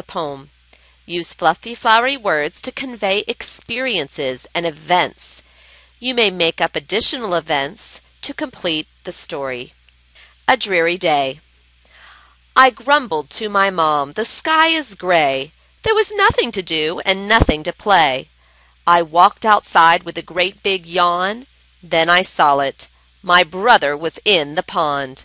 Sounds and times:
Speech: 0:00.0 - 0:00.5, 0:01.1 - 0:05.4, 0:06.0 - 0:09.8, 0:10.5 - 0:11.4, 0:12.6 - 0:18.3, 0:18.9 - 0:25.2.

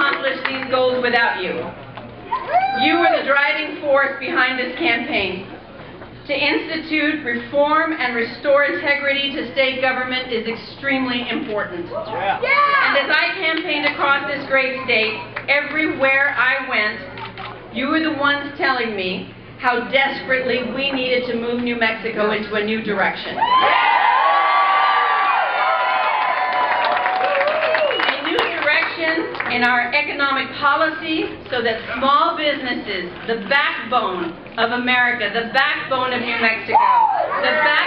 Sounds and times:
Female speech, woman speaking: 0:00.0 - 0:01.7, 0:02.7 - 0:05.5, 0:06.3 - 0:17.1, 0:17.8 - 0:23.4, 0:28.0 - 0:36.8, 0:37.4 - 0:37.8.

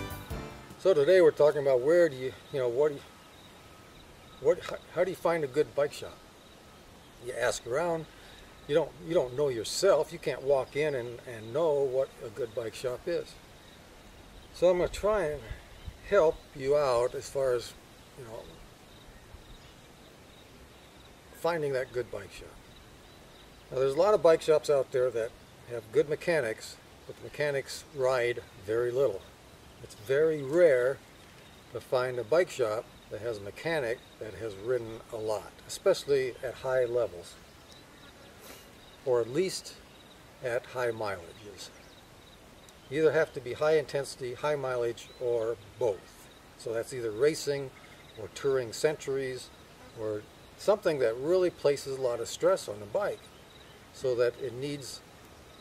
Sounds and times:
Speech: 0:00.8 - 0:03.1, 0:04.4 - 0:06.2, 0:07.2 - 0:08.1, 0:08.7 - 0:13.4, 0:14.6 - 0:18.6, 0:21.4 - 0:22.6, 0:23.7 - 0:29.2, 0:29.8 - 0:31.0, 0:31.8 - 0:37.4, 0:39.1 - 0:39.8, 0:40.4 - 0:41.7, 0:42.9 - 0:53.2, 0:54.0 - 0:55.0.

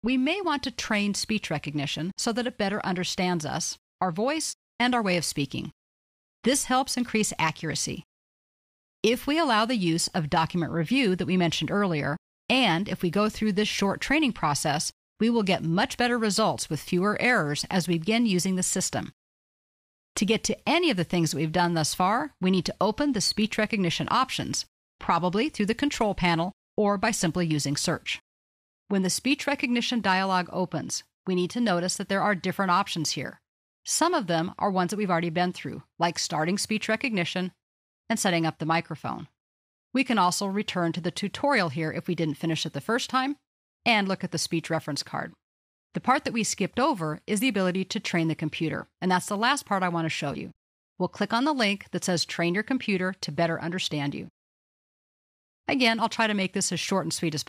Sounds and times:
Speech: 0:00.1 - 0:05.8, 0:06.5 - 0:08.1, 0:09.1 - 0:19.2, 0:20.2 - 0:28.2, 0:28.9 - 0:39.4, 0:40.0 - 0:45.4, 0:46.0 - 0:54.3, 0:55.7 - 0:57.4.

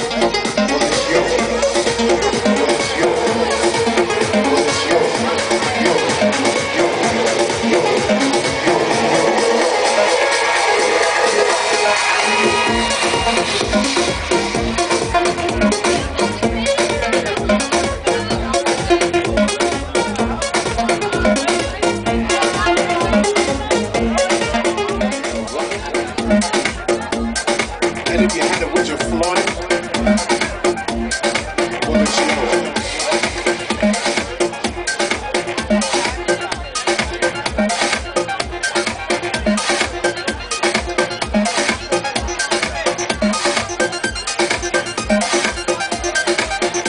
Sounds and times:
Music: 0:00.0 - 0:46.8.

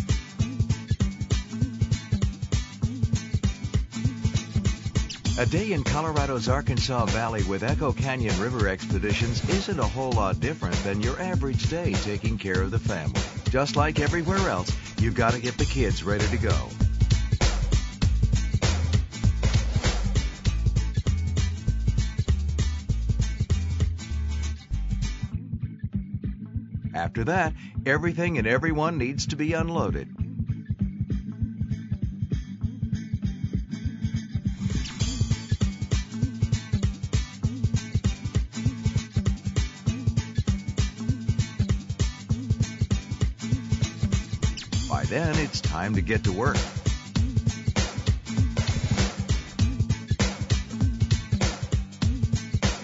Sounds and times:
Music: 0:00.0 - 0:52.8
Speech: 0:05.4 - 0:16.8, 0:27.0 - 0:30.1, 0:44.9 - 0:46.7.

